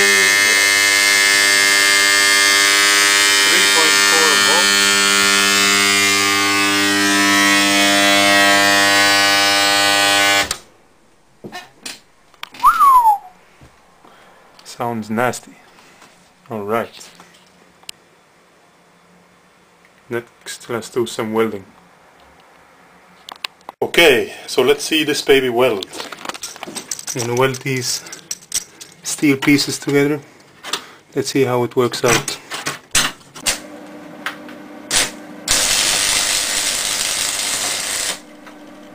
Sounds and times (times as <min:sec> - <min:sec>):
Speech: 0:03.5 - 0:04.7, 0:14.7 - 0:15.6, 0:16.5 - 0:17.2, 0:20.1 - 0:21.8, 0:23.8 - 0:26.0, 0:27.2 - 0:28.1, 0:29.0 - 0:30.2, 0:31.2 - 0:32.4.